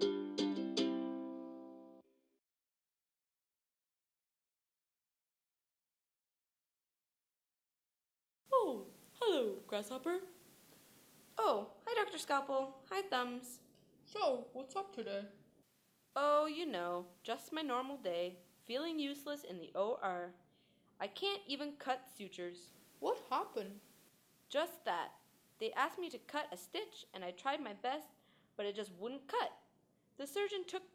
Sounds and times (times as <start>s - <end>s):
Female speech, woman speaking: 8.5s - 10.4s, 11.4s - 15.4s, 16.2s - 20.4s, 21.0s - 23.8s, 24.5s - 29.6s, 30.2s - 30.9s
Conversation: 8.6s - 30.7s.